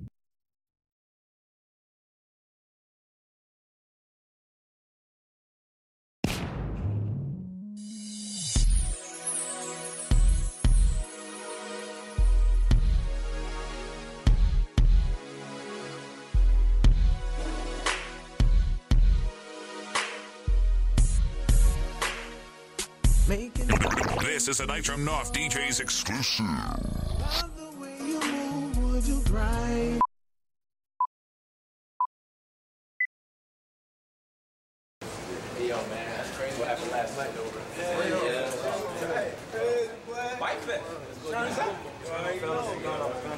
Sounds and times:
Music: 6.8s - 26.0s, 27.3s - 30.1s
Speech: 23.6s - 27.5s, 35.3s - 43.3s.

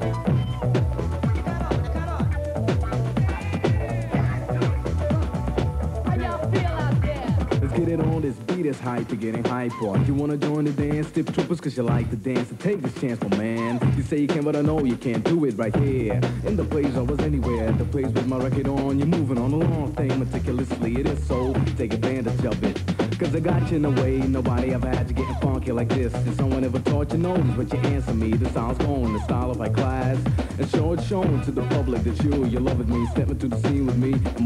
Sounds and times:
Music: 0.0s - 34.4s.

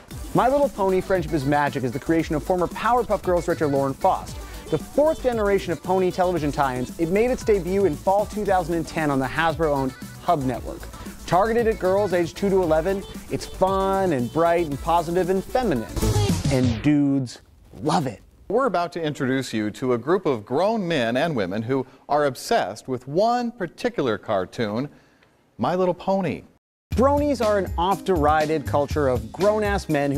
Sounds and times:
Music: 0.0s - 16.9s, 26.9s - 30.1s
Speech: 0.4s - 24.9s, 25.6s - 30.1s.

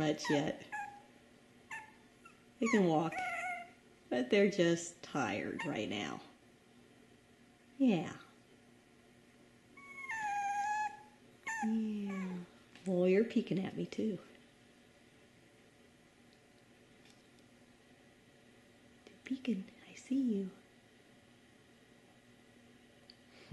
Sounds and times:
Speech: 0.0s - 0.7s, 2.6s - 3.2s, 4.1s - 6.4s, 7.8s - 8.4s, 11.6s - 14.4s, 19.2s - 20.6s
Dog: 0.2s - 1.1s, 1.7s - 3.8s, 9.8s - 12.5s.

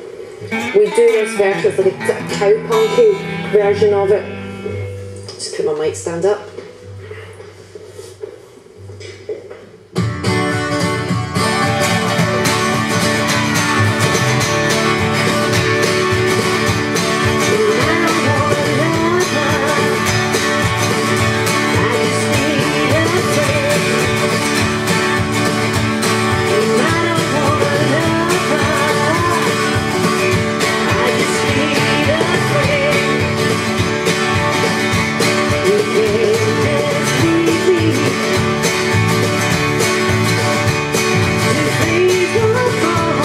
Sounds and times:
Electric guitar: 0.0s - 43.2s
Strum: 0.0s - 43.2s.

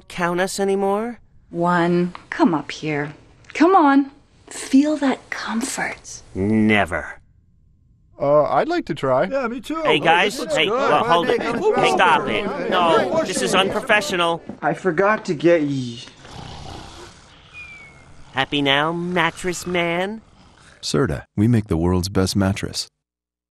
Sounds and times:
Speech: 20.8s - 22.9s.

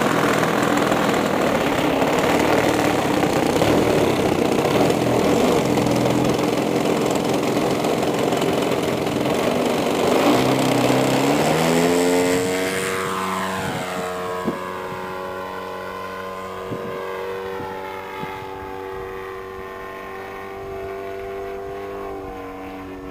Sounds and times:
Fixed-wing aircraft, airplane: 0.0s - 23.1s.

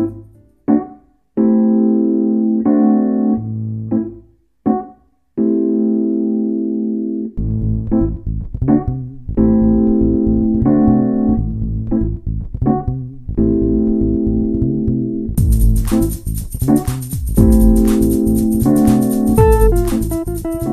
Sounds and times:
Synthesizer: 0.0s - 12.1s, 12.8s - 20.7s.

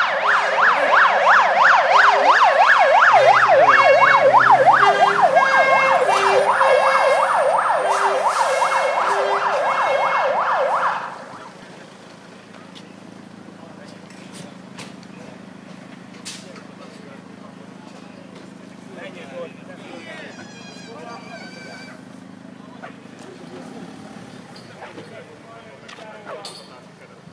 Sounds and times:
Vehicle: 0.0s - 27.3s
Speech: 11.6s - 15.6s, 16.2s - 27.3s.

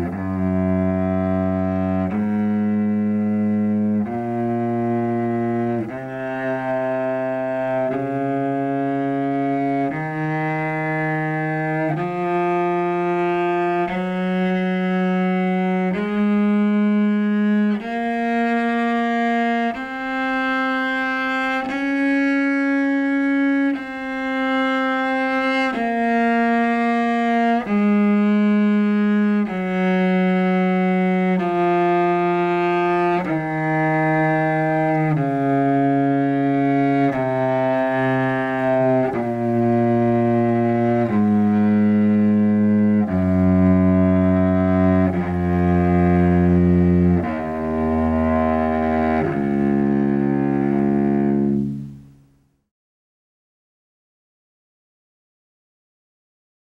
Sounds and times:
Double bass: 0.0s - 52.5s
Cello: 0.0s - 52.6s.

